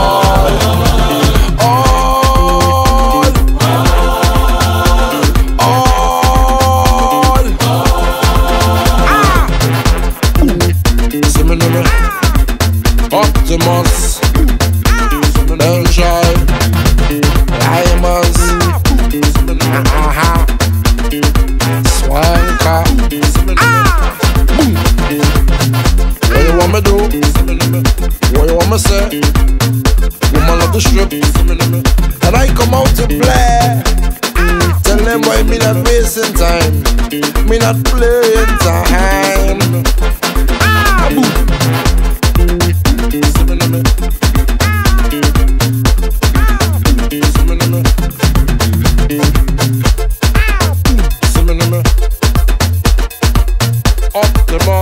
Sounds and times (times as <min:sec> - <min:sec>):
Afrobeat: 0:00.0 - 0:54.8.